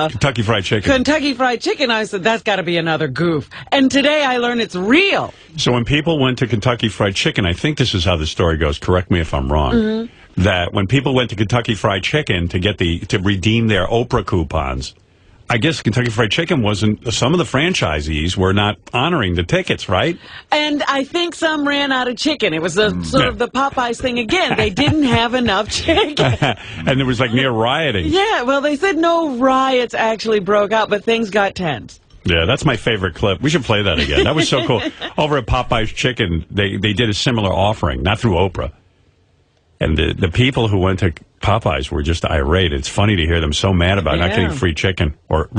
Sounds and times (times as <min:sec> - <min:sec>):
Speech: 0:00.0 - 0:38.8, 0:39.8 - 0:45.5.